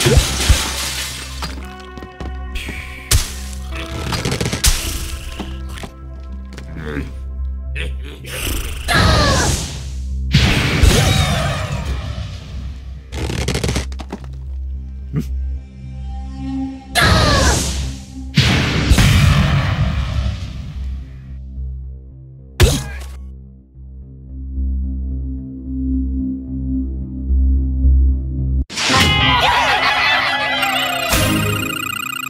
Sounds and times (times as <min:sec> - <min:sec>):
Music: 0:00.0 - 0:32.2.